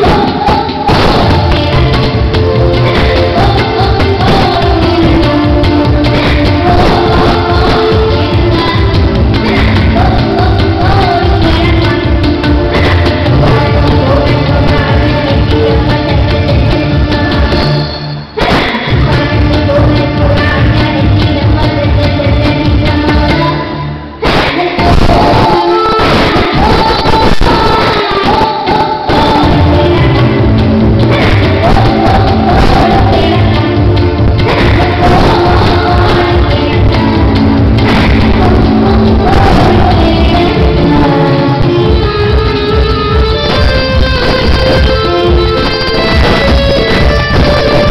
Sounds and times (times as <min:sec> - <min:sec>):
Folk music: 0:00.0 - 0:24.1, 0:29.2 - 0:47.9.